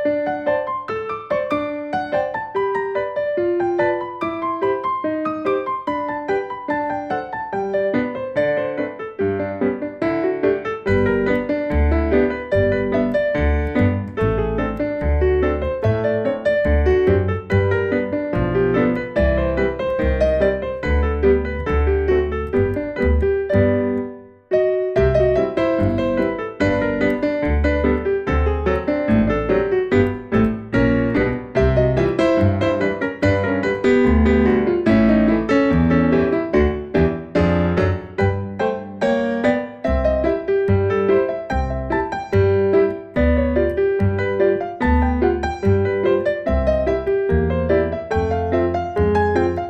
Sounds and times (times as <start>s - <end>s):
Music: 0.0s - 49.6s.